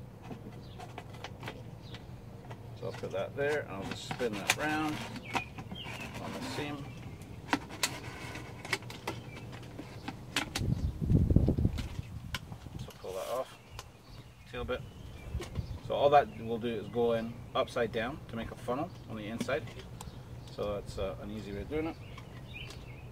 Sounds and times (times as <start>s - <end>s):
Speech: 2.8s - 5.0s, 6.2s - 6.9s, 12.9s - 13.5s, 14.5s - 14.8s, 15.8s - 19.7s, 20.5s - 22.0s.